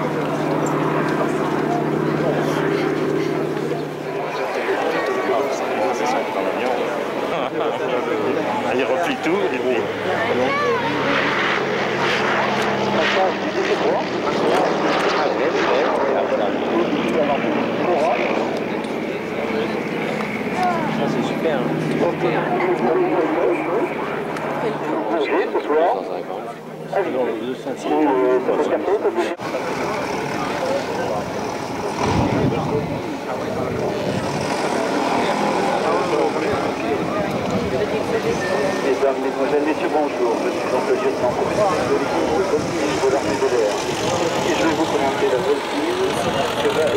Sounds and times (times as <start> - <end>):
Jet engine: 0.0 - 46.9
Speech: 0.0 - 46.9.